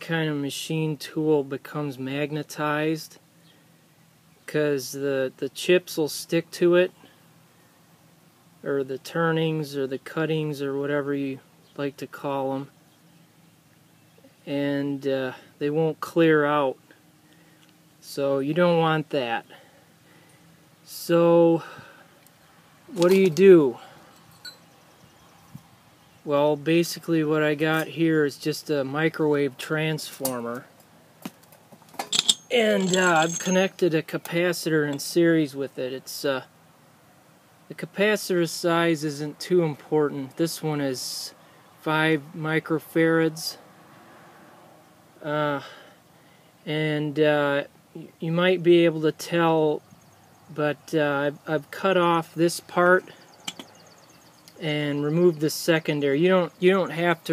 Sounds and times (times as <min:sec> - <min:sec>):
Speech: 0:00.0 - 0:03.2, 0:04.5 - 0:07.0, 0:08.6 - 0:12.7, 0:14.5 - 0:16.8, 0:18.0 - 0:19.5, 0:20.9 - 0:21.7, 0:22.9 - 0:23.8, 0:26.3 - 0:30.7, 0:32.5 - 0:36.5, 0:37.7 - 0:43.6, 0:45.2 - 0:45.7, 0:46.7 - 0:49.8, 0:50.5 - 0:53.1, 0:54.6 - 0:57.3.